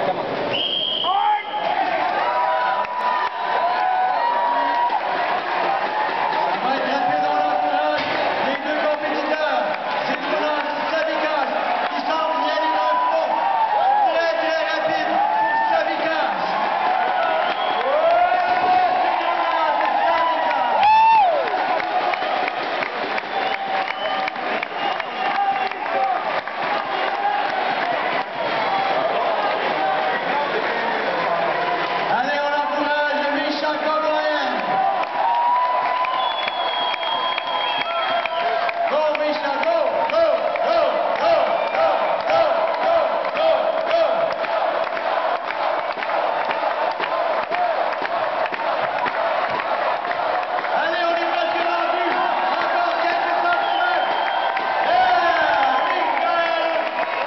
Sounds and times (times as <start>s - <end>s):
Speech: 6.6s - 16.6s, 32.1s - 34.7s, 38.9s - 44.2s, 50.8s - 54.0s, 54.9s - 57.0s.